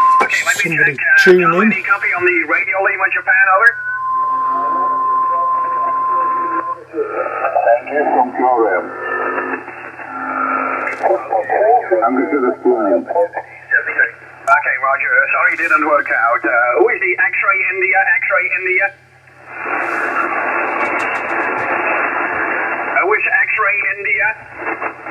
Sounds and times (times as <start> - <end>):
Radio: 0.0 - 3.8, 4.4 - 25.1
Speech: 0.2 - 3.7, 4.6 - 9.0, 10.9 - 19.0, 23.0 - 24.4.